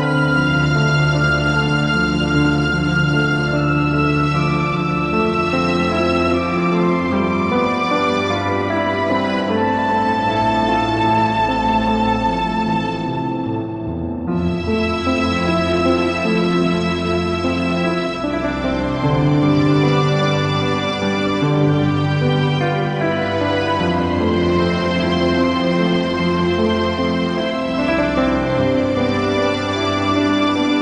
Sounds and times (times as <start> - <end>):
Sad music: 0.0 - 30.8.